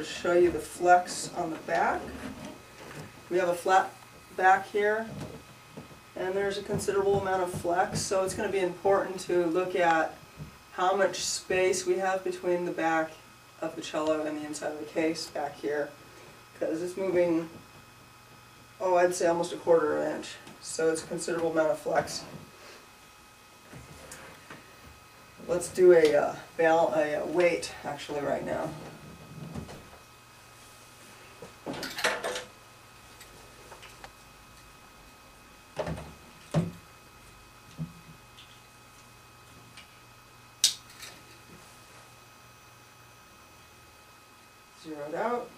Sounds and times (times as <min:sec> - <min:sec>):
Speech: 0:00.0 - 0:02.2, 0:03.3 - 0:05.2, 0:06.2 - 0:16.0, 0:16.6 - 0:17.6, 0:18.8 - 0:22.4, 0:25.4 - 0:28.9, 0:44.8 - 0:45.5.